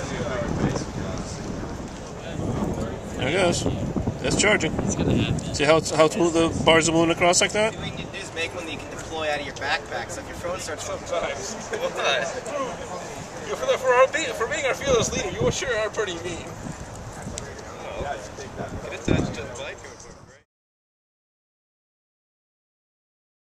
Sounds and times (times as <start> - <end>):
Speech: 0.0 - 16.5, 17.1 - 20.5.